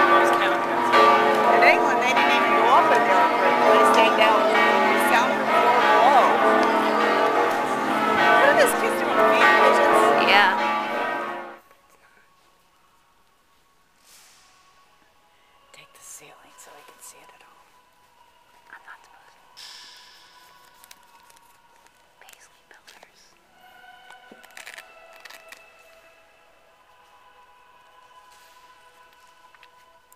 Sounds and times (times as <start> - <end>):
Music: 0.0 - 30.1
Whispering: 11.7 - 12.7, 15.6 - 24.7.